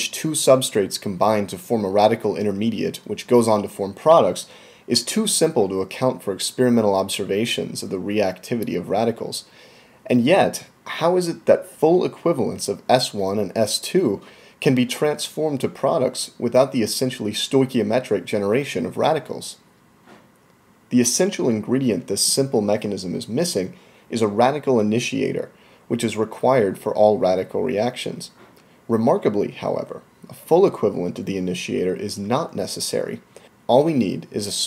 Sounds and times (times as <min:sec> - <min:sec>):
Speech: 0:00.0 - 0:09.5, 0:10.1 - 0:19.6, 0:20.9 - 0:34.6.